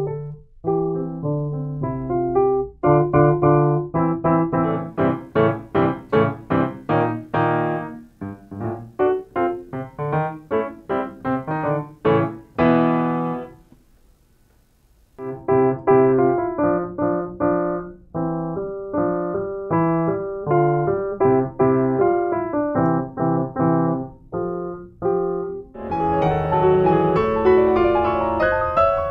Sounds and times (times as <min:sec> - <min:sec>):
Classical music: 0:00.0 - 0:13.7, 0:15.2 - 0:29.1
Piano: 0:00.0 - 0:14.4, 0:15.0 - 0:29.1.